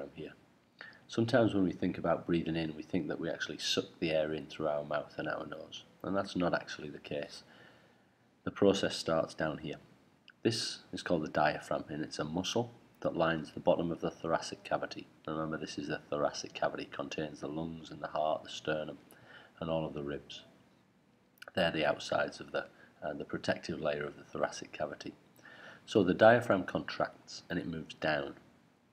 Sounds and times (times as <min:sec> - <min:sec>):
Speech: 0:00.0 - 0:00.4, 0:01.1 - 0:07.5, 0:08.4 - 0:19.0, 0:19.6 - 0:20.5, 0:21.4 - 0:25.2, 0:25.9 - 0:28.4.